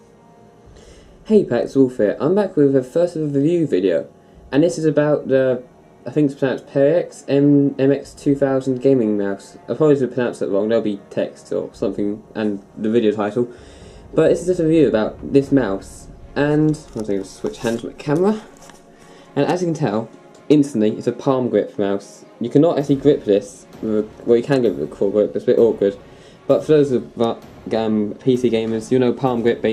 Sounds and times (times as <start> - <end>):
Music: 0.0 - 29.7
Speech: 1.3 - 18.6, 19.4 - 29.7.